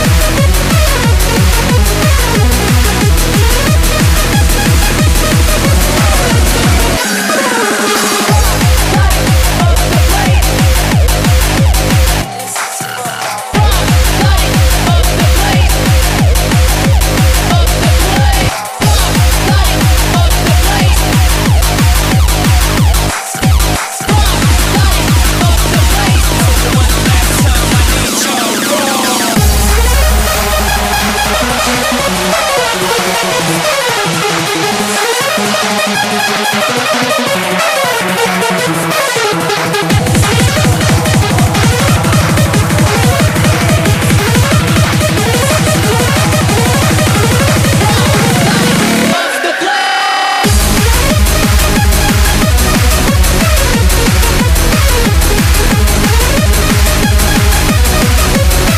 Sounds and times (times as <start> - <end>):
Drum: 0.0 - 49.2, 50.4 - 58.7.